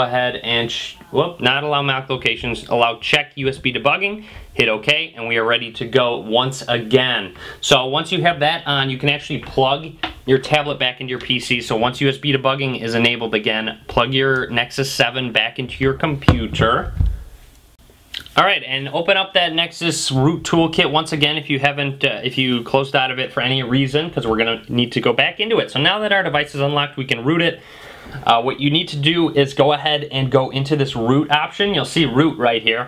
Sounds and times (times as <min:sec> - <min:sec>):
Speech: 0:00.0 - 0:17.0, 0:18.2 - 0:27.6, 0:28.2 - 0:32.8
Inside, small room: 0:00.0 - 0:32.8.